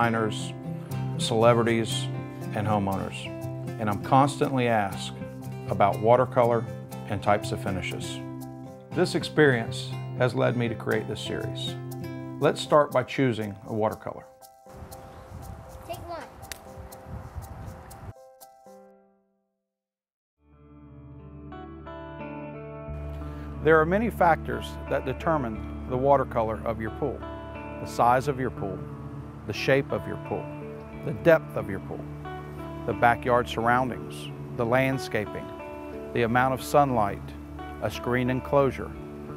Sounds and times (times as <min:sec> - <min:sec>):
Music: 0:00.0 - 0:19.6, 0:20.4 - 0:39.3
Speech: 0:01.2 - 0:05.1, 0:05.7 - 0:08.2, 0:12.4 - 0:14.3, 0:23.6 - 0:27.2, 0:29.5 - 0:32.0, 0:32.9 - 0:35.5, 0:36.2 - 0:38.9.